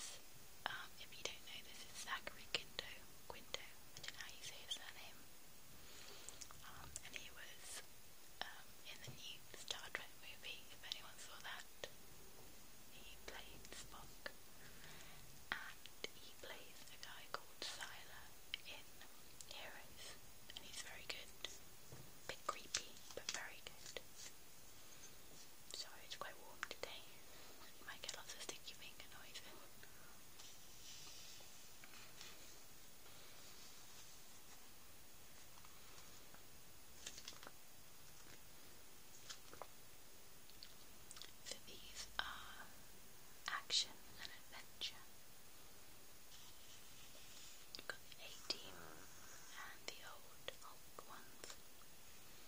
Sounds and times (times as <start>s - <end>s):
Whispering: 0.0s - 5.2s, 6.5s - 12.0s, 12.9s - 14.4s, 15.5s - 21.6s, 22.2s - 24.3s, 25.7s - 31.3s, 41.2s - 42.8s, 43.4s - 45.1s, 47.1s - 51.6s.